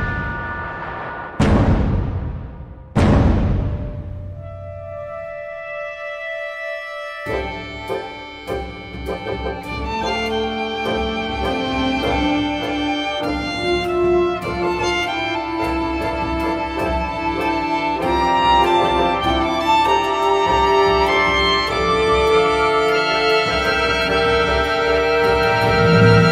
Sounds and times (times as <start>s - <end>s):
Music: 2.8s - 26.3s.